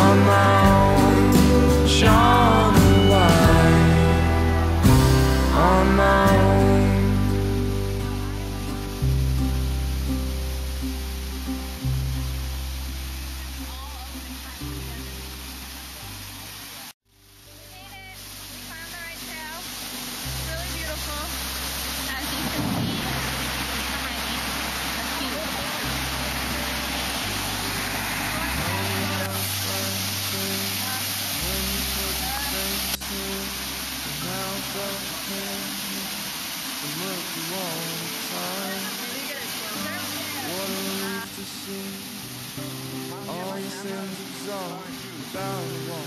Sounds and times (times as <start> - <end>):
Stream: 0.0 - 46.0.